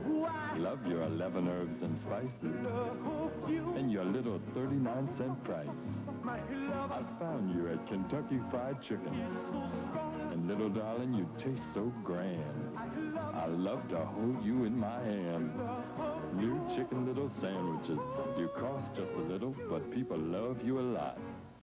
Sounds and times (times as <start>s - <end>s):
Music: 0.0s - 21.6s
Speech: 0.6s - 2.7s, 3.8s - 6.0s, 7.2s - 9.2s, 10.3s - 12.5s, 13.4s - 15.5s, 16.3s - 21.2s.